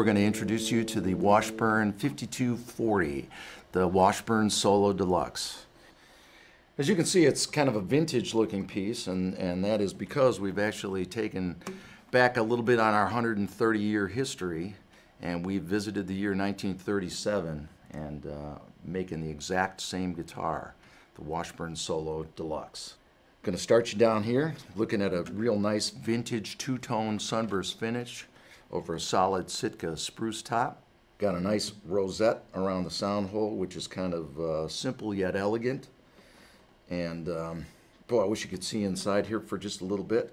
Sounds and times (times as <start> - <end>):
Speech: 0.0 - 5.7, 6.8 - 36.0, 36.9 - 40.3.